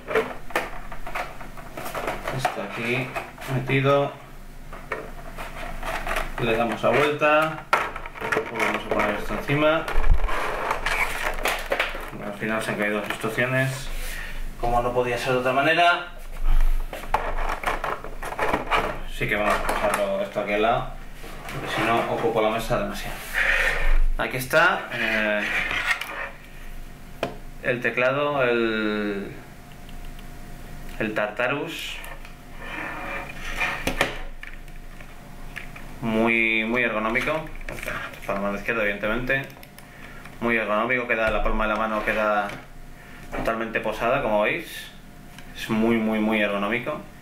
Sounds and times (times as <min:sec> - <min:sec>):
Speech: 0:02.3 - 0:04.3, 0:06.4 - 0:07.7, 0:08.4 - 0:09.9, 0:12.2 - 0:14.0, 0:14.6 - 0:16.2, 0:19.1 - 0:21.0, 0:21.6 - 0:23.2, 0:24.2 - 0:25.6, 0:27.6 - 0:29.4, 0:31.0 - 0:32.2, 0:36.0 - 0:39.6, 0:40.4 - 0:42.7, 0:43.4 - 0:45.0, 0:45.6 - 0:47.1.